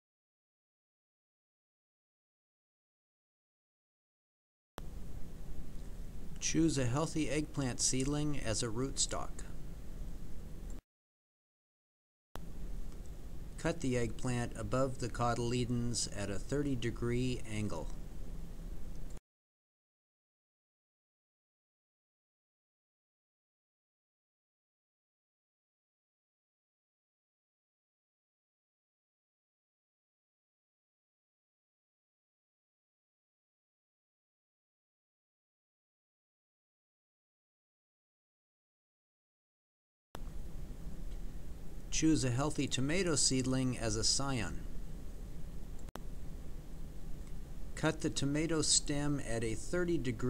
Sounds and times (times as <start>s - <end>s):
Speech: 6.4s - 9.6s, 13.6s - 18.0s, 41.9s - 44.7s, 47.8s - 50.2s.